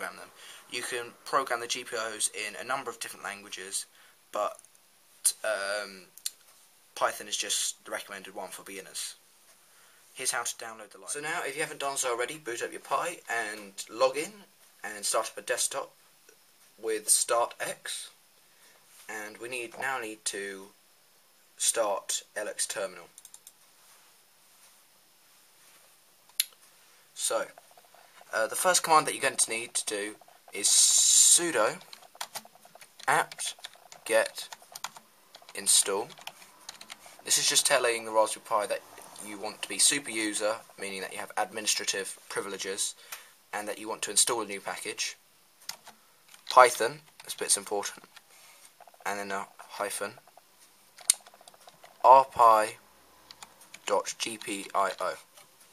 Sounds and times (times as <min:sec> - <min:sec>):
Speech: 0:00.0 - 0:04.6, 0:05.2 - 0:06.2, 0:07.0 - 0:09.2, 0:10.2 - 0:16.0, 0:16.8 - 0:18.2, 0:19.1 - 0:20.8, 0:21.6 - 0:23.2, 0:27.2 - 0:27.6, 0:28.3 - 0:31.9, 0:33.1 - 0:34.6, 0:35.5 - 0:36.2, 0:37.2 - 0:45.2, 0:46.5 - 0:48.1, 0:49.0 - 0:50.2, 0:52.0 - 0:52.8, 0:53.8 - 0:55.3
Typing: 0:23.2 - 0:23.6, 0:27.5 - 0:37.1, 0:45.7 - 0:47.4, 0:51.0 - 0:52.0.